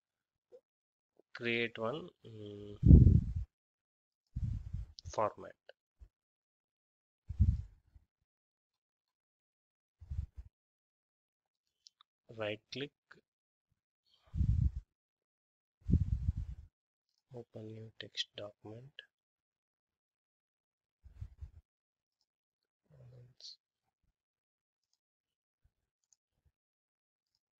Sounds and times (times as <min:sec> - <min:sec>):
Speech: 0:01.4 - 0:02.8, 0:05.1 - 0:05.7, 0:12.3 - 0:13.0, 0:17.4 - 0:19.1, 0:23.0 - 0:23.6.